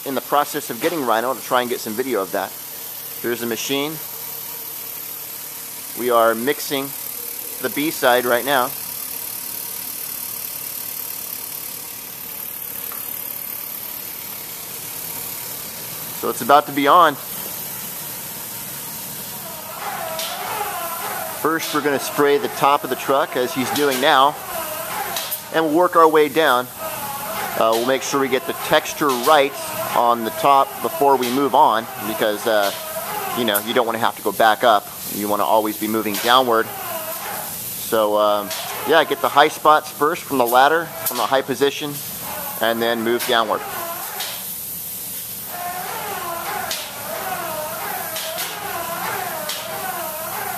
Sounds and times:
Speech: 0.0s - 2.5s, 3.2s - 4.0s, 6.0s - 7.0s, 7.6s - 8.8s, 16.2s - 17.2s, 21.4s - 24.4s, 25.5s - 26.7s, 27.6s - 32.8s, 33.4s - 36.8s, 37.9s - 42.0s, 42.6s - 43.6s
Inside, large room or hall: 0.0s - 50.5s.

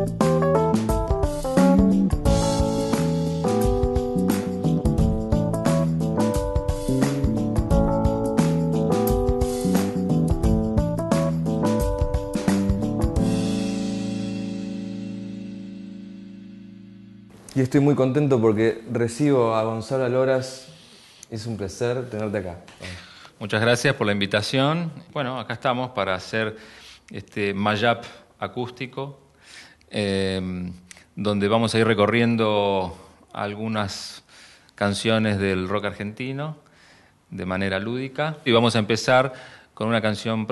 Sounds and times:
Speech: 17.5s - 29.2s, 29.9s - 34.2s, 34.8s - 36.6s, 37.3s - 40.5s.

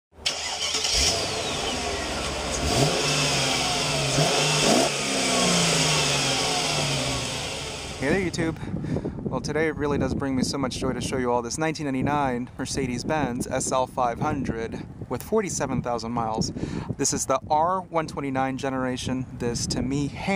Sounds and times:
Outside, urban or manmade: 0.1s - 20.3s
Car: 0.2s - 8.7s
Speech: 8.0s - 8.6s, 9.3s - 20.3s.

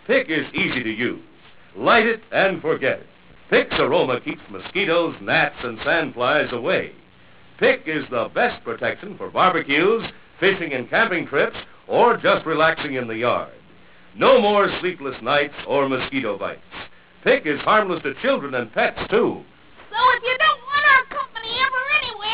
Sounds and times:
Speech: 0.0s - 7.0s, 14.2s - 16.6s.

